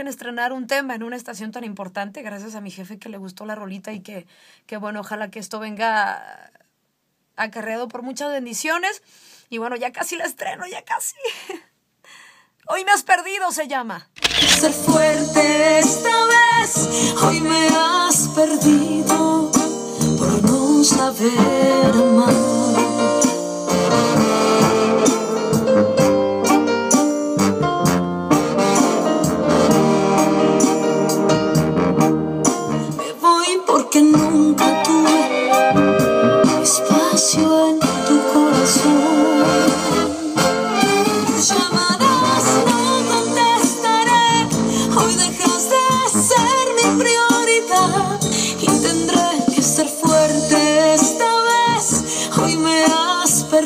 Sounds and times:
Speech: 0:00.0 - 0:06.7, 0:07.4 - 0:11.3, 0:12.7 - 0:14.1.

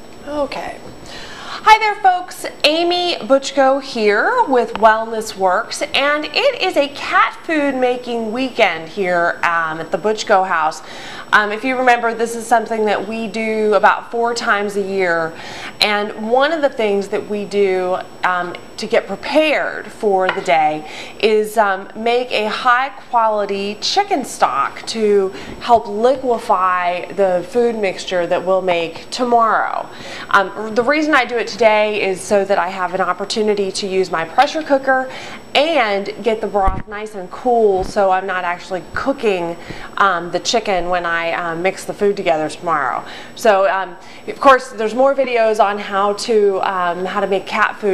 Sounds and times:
Speech: 0:00.2 - 0:00.9, 0:01.6 - 0:47.9.

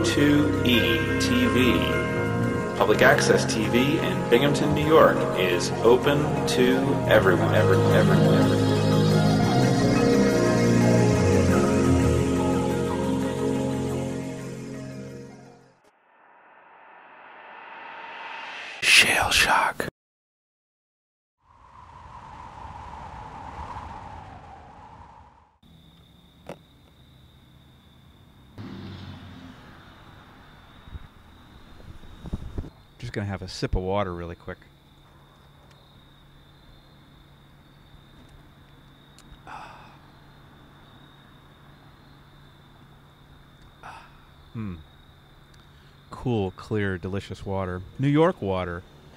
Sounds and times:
Speech: 0:00.0 - 0:02.0, 0:02.8 - 0:08.4, 0:18.8 - 0:19.9, 0:33.0 - 0:34.7, 0:46.1 - 0:48.8.

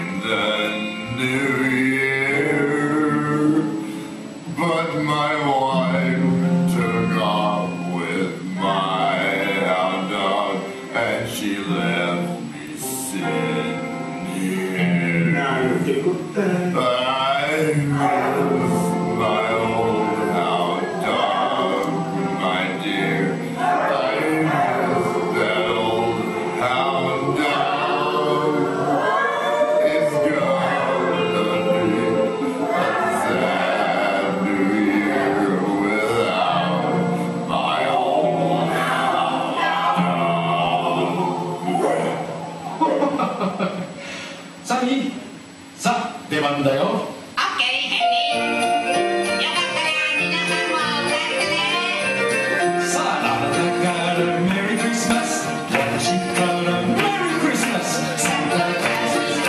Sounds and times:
Music: 0:00.0 - 0:44.7, 0:47.2 - 0:59.4.

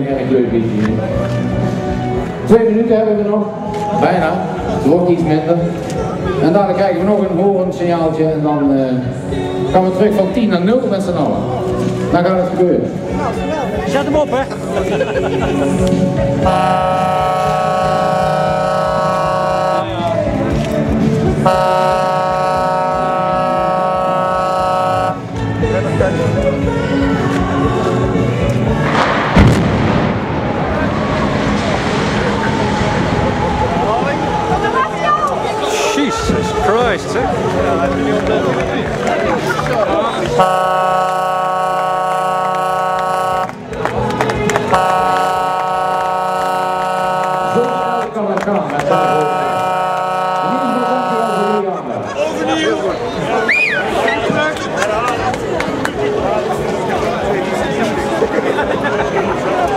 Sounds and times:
Music: 0:00.0 - 0:31.6, 0:32.6 - 0:40.6, 0:43.4 - 0:46.2, 0:53.5 - 0:59.7.

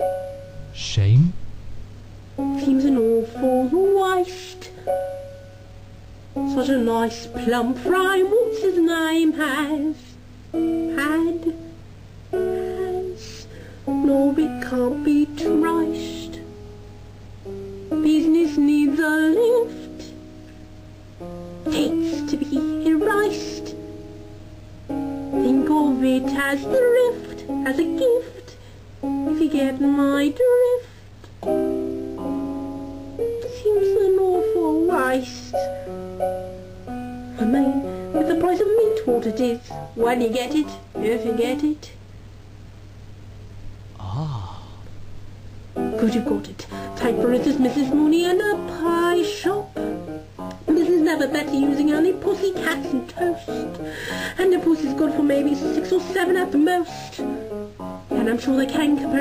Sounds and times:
Music: 0:00.0 - 0:42.2, 0:45.0 - 0:59.2
Female singing: 0:02.6 - 0:04.7, 0:06.5 - 0:10.2, 0:12.6 - 0:16.4, 0:18.0 - 0:20.2, 0:21.7 - 0:23.8, 0:25.4 - 0:28.6, 0:29.3 - 0:30.9, 0:33.4 - 0:35.7, 0:37.4 - 0:41.9, 0:46.0 - 0:49.6, 0:50.7 - 0:53.6, 0:54.4 - 0:57.2, 0:58.2 - 0:59.2.

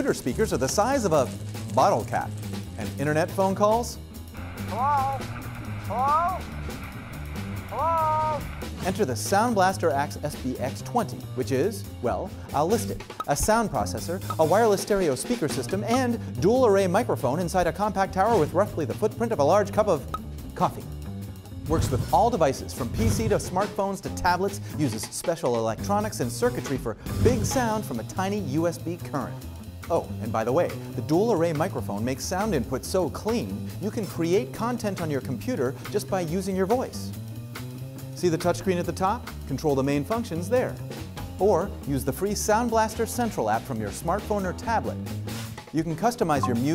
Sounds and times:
Speech: 0:00.0 - 0:04.0, 0:07.8 - 0:20.9, 0:21.7 - 0:37.1, 0:38.2 - 0:40.8, 0:41.4 - 0:45.0, 0:45.7 - 0:46.7
Music: 0:00.0 - 0:46.7.

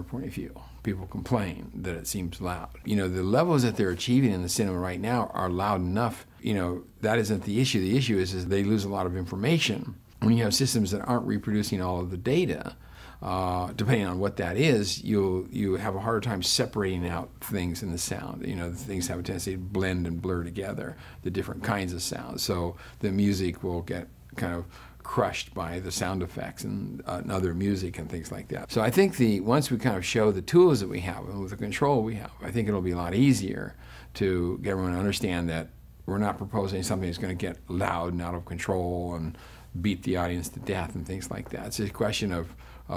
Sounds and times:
Speech: 0:00.0 - 0:42.9.

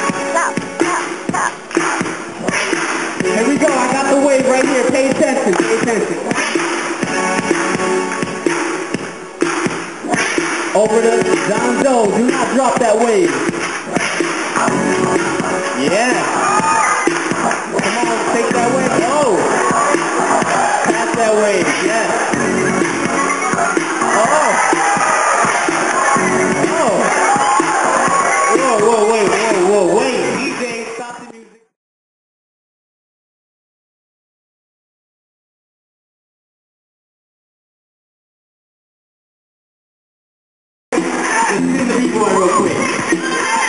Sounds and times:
Music: 0:00.0 - 0:31.8, 0:40.9 - 0:43.6
Cheering: 0:15.8 - 0:30.1, 0:41.0 - 0:43.6.

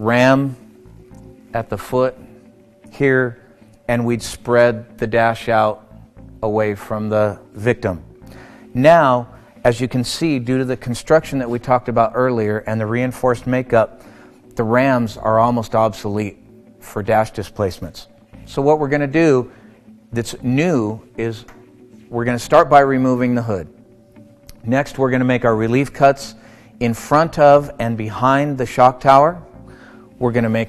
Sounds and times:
Speech: 0:00.0 - 0:00.6, 0:01.6 - 0:02.2, 0:02.9 - 0:05.8, 0:06.4 - 0:08.0, 0:08.8 - 0:13.9, 0:14.6 - 0:19.5, 0:20.2 - 0:23.7, 0:24.6 - 0:29.4, 0:30.2 - 0:30.6.

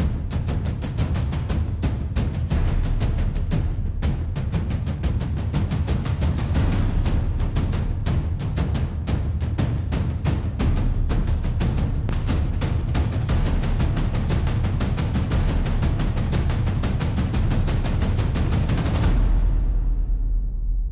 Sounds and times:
Music: 0:00.0 - 0:20.9.

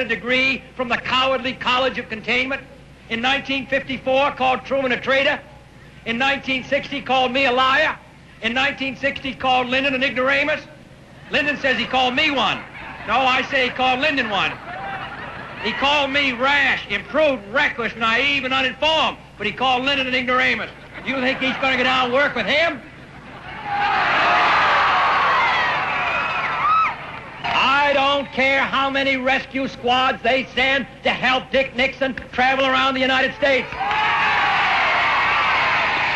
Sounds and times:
Male speech, man speaking: 0:00.0 - 0:05.5, 0:06.1 - 0:14.6, 0:15.6 - 0:22.9, 0:27.5 - 0:33.7
Narration, monologue: 0:00.0 - 0:23.2, 0:27.4 - 0:33.8.

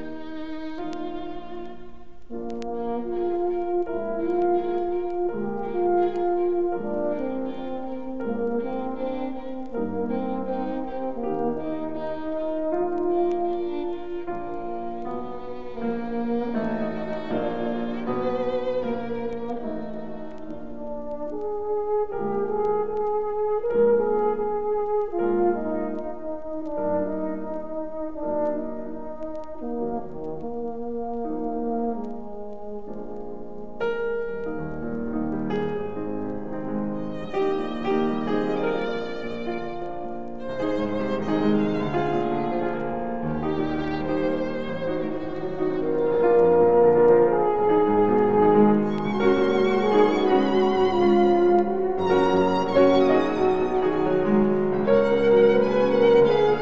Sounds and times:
Violin, fiddle: 0:00.0 - 0:21.5, 0:36.9 - 0:56.6.

